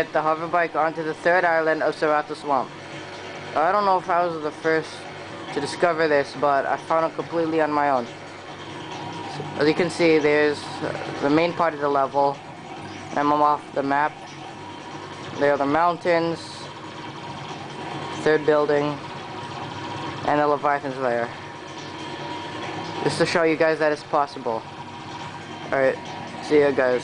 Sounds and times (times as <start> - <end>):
Mechanisms: 0.0 - 27.0.